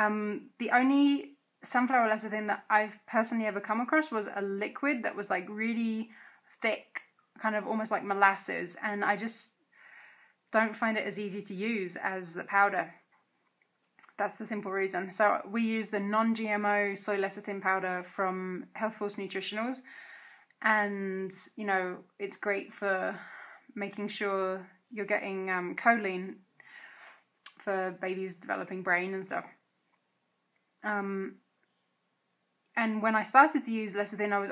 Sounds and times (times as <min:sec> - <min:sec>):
Speech: 0:00.0 - 0:09.6, 0:10.5 - 0:13.0, 0:14.0 - 0:19.9, 0:20.6 - 0:26.4, 0:27.5 - 0:29.6, 0:30.8 - 0:31.4, 0:32.8 - 0:34.5.